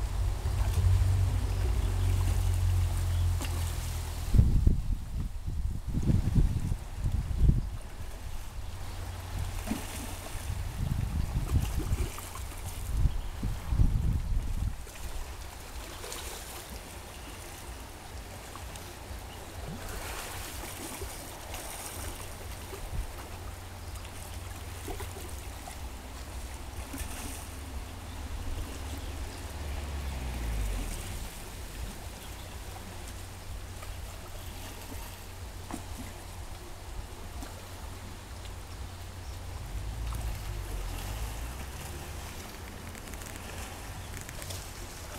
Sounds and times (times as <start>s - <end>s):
Outside, rural or natural: 0.0s - 45.1s
Stream: 0.0s - 45.1s.